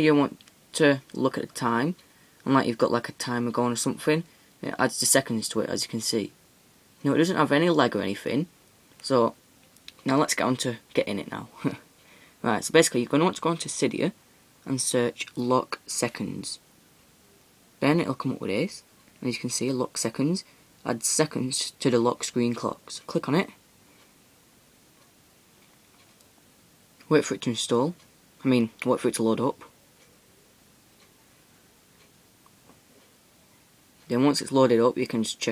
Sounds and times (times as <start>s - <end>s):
Speech: 0.0s - 6.4s, 7.0s - 16.6s, 17.8s - 23.6s, 27.0s - 29.8s, 34.1s - 35.5s.